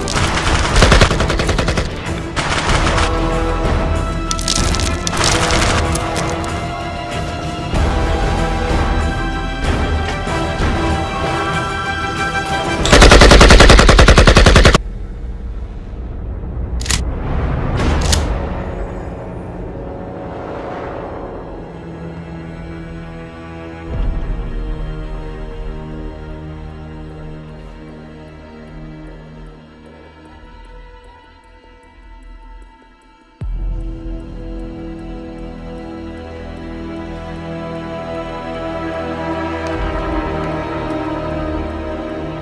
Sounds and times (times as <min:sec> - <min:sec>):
Machine gun: 0:00.0 - 0:03.2, 0:12.9 - 0:14.8.